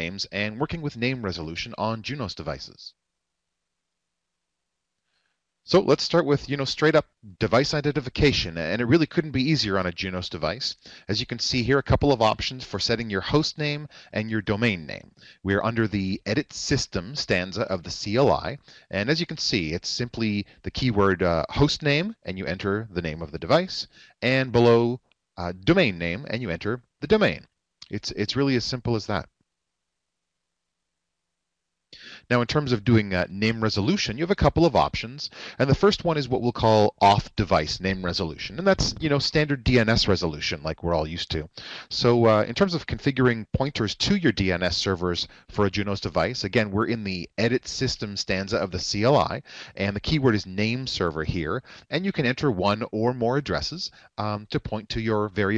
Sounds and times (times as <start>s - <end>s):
Speech: 0.0s - 3.0s, 5.7s - 29.3s, 32.0s - 55.5s.